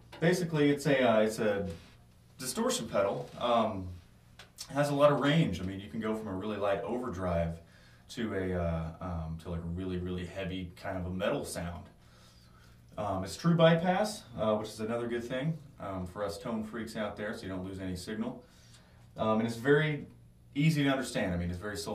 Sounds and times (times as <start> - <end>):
Speech: 0.2 - 12.0, 13.0 - 18.5, 19.2 - 21.9.